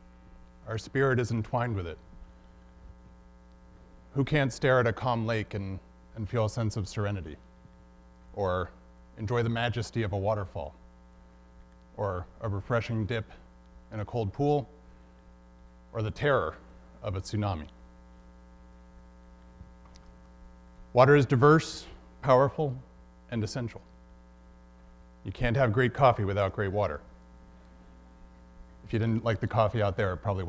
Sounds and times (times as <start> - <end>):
Speech: 0.6 - 2.0, 4.2 - 7.4, 8.4 - 10.8, 12.0 - 14.8, 16.0 - 17.8, 21.0 - 23.9, 25.2 - 27.1, 28.9 - 30.4.